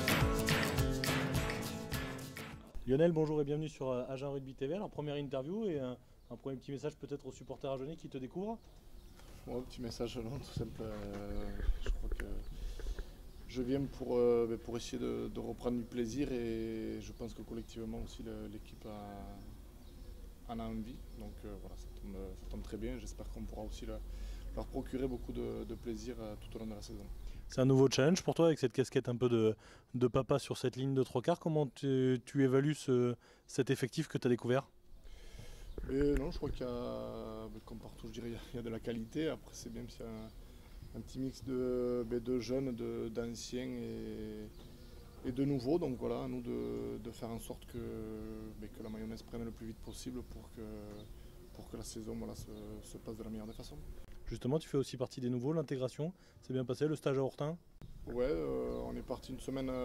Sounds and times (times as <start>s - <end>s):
Speech: 2.6s - 8.7s, 9.5s - 12.5s, 13.5s - 19.6s, 20.5s - 34.7s, 35.8s - 44.6s, 45.2s - 59.8s.